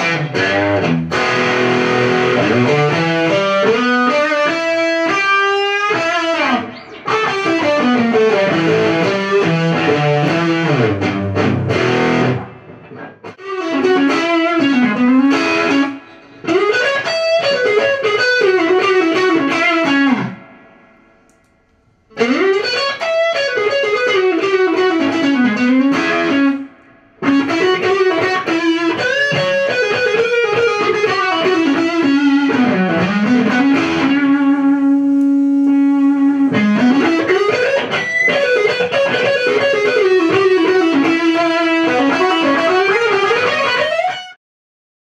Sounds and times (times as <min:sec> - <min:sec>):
Electric guitar: 0:00.0 - 0:44.4.